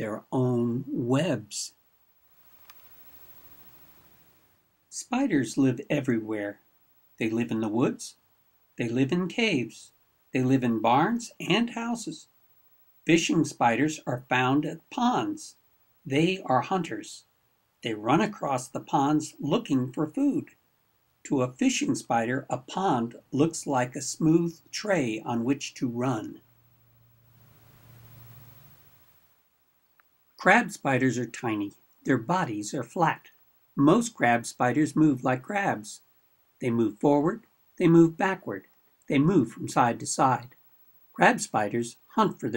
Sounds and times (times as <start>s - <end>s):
Inside, small room: 0.0s - 42.5s
Narration, monologue: 0.0s - 42.5s.